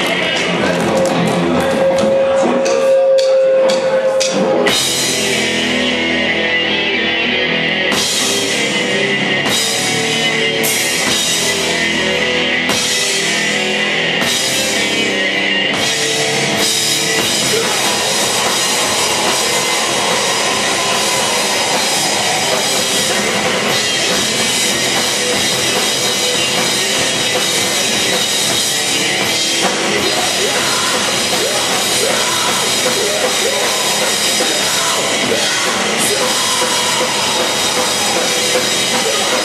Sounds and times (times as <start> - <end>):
Music: 0.0 - 39.4.